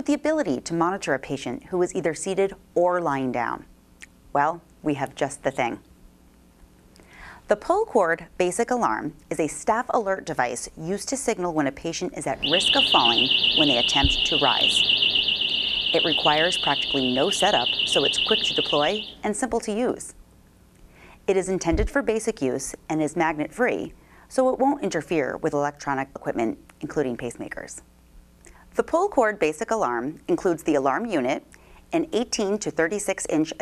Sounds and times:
Speech: 0.0s - 3.7s, 4.4s - 5.8s, 7.5s - 14.8s, 15.9s - 20.2s, 21.3s - 27.9s, 28.7s - 33.6s.

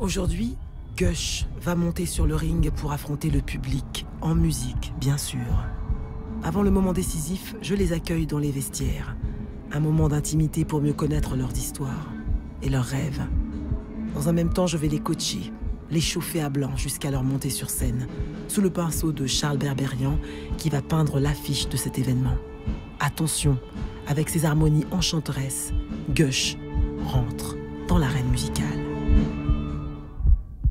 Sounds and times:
Speech: 0.0s - 5.8s, 6.4s - 13.4s, 14.2s - 22.4s, 23.0s - 28.9s
Music: 0.0s - 30.7s.

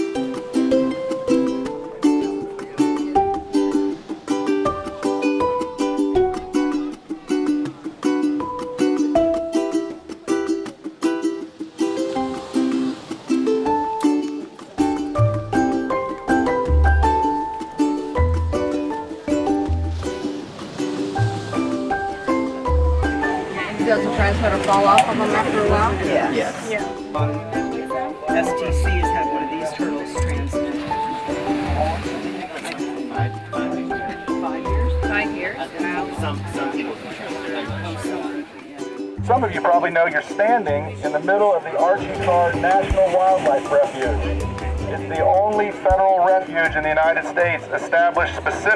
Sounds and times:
Music: 0.0s - 48.7s
Speech: 23.5s - 27.0s, 31.8s - 44.2s, 44.8s - 48.7s.

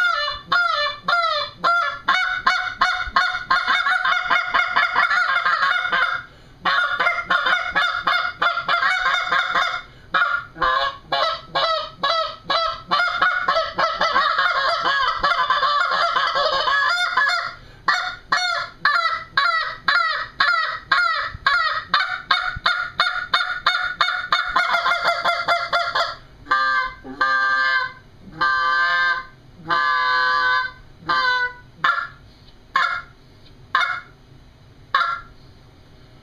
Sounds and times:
Honk: 0.0s - 32.2s, 32.8s - 33.1s, 33.8s - 34.1s, 34.9s - 35.3s.

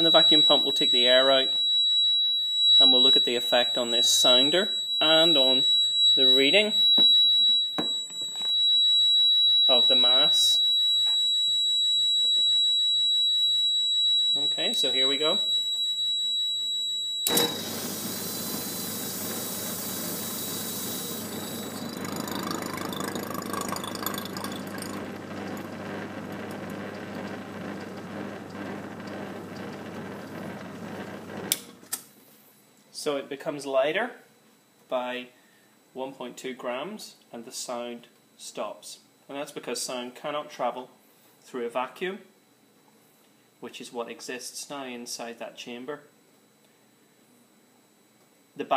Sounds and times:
Speech: 0.0s - 1.6s, 2.8s - 6.8s, 9.7s - 10.6s, 14.4s - 15.5s, 32.9s - 34.3s, 34.9s - 35.4s, 36.0s - 42.3s, 43.6s - 46.1s, 48.6s - 48.7s.

